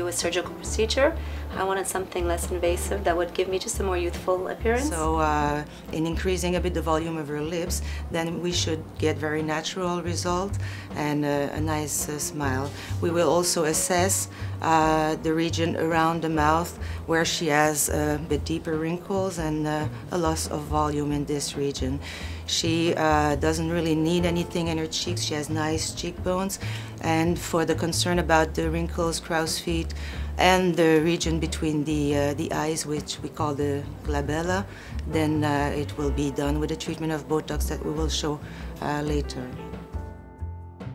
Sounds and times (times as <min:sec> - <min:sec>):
Speech: 0:00.0 - 0:39.6
Music: 0:00.0 - 0:40.9.